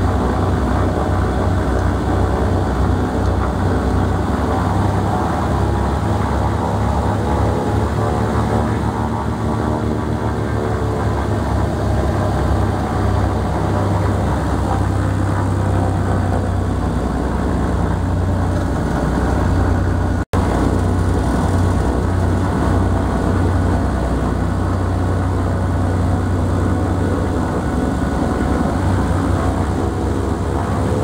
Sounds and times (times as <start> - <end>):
Aircraft: 0.0 - 31.0
Outside, rural or natural: 0.0 - 31.0.